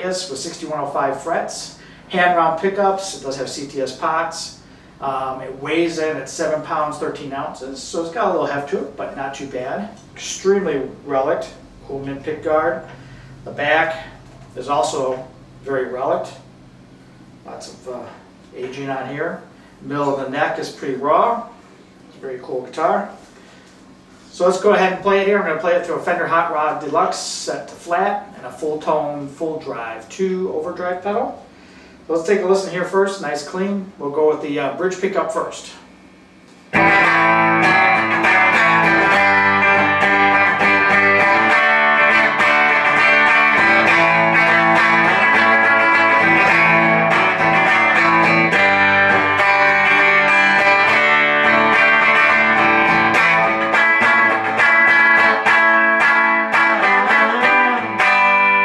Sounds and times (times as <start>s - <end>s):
Speech: 0.0s - 16.5s, 17.4s - 23.2s, 24.3s - 31.5s, 32.1s - 35.9s.